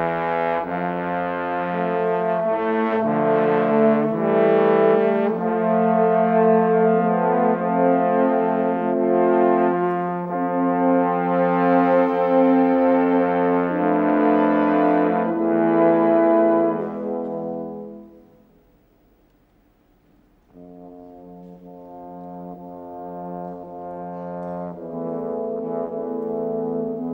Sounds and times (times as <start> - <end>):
Trombone: 0.0 - 18.4, 20.5 - 27.1
French horn: 0.0 - 18.7, 20.4 - 27.1.